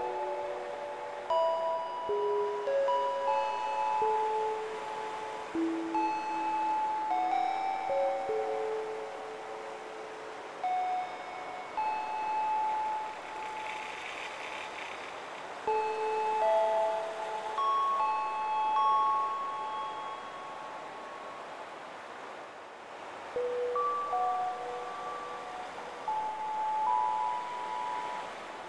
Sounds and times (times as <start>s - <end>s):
Music: 0.0s - 14.2s, 15.6s - 21.4s, 23.3s - 28.6s.